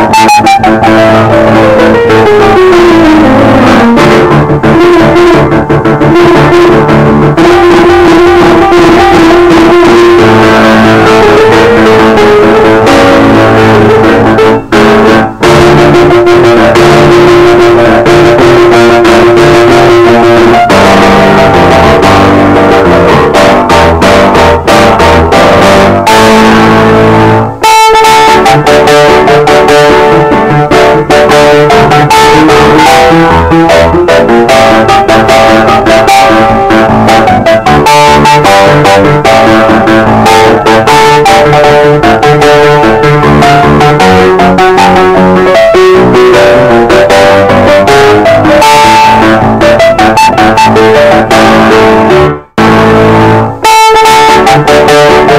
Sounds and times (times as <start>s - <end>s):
Music: 0.0s - 55.3s.